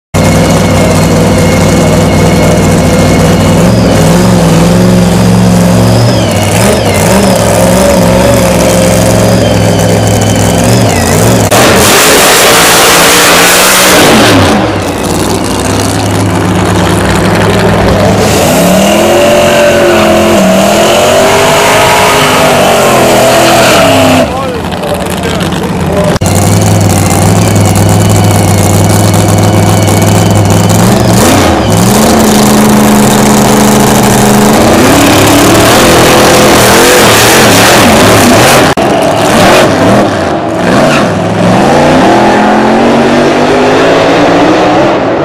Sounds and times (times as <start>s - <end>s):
Car: 0.1s - 45.2s.